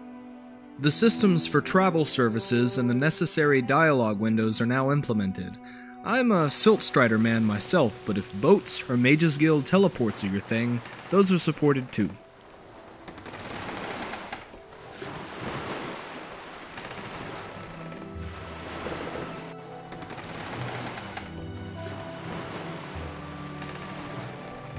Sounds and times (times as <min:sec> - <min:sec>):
Speech: 0:00.8 - 0:12.2.